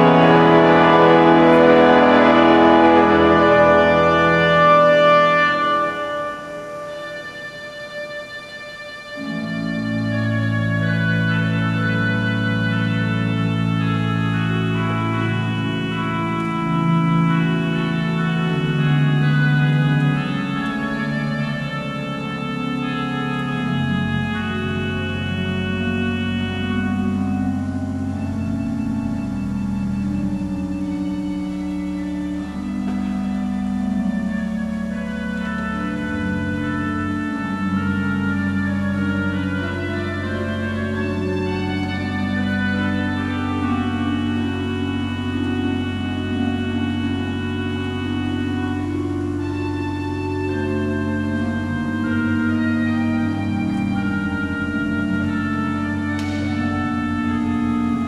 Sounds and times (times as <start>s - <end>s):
Hammond organ: 0.0s - 58.0s.